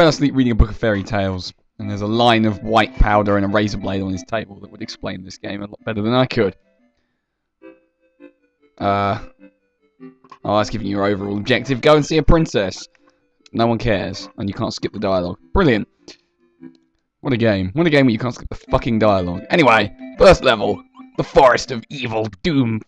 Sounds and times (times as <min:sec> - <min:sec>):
Speech: 0:00.0 - 0:06.6, 0:08.8 - 0:09.3, 0:10.5 - 0:12.9, 0:13.6 - 0:15.9, 0:17.3 - 0:22.8.